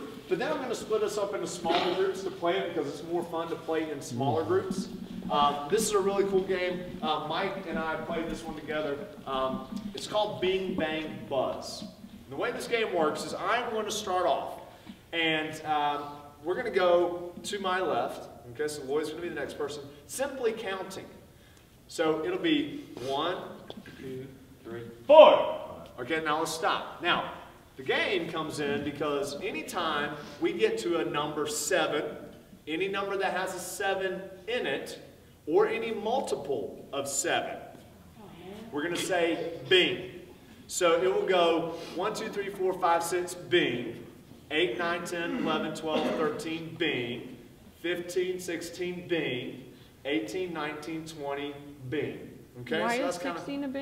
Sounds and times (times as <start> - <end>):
Speech: 0.0 - 21.2, 21.9 - 53.8.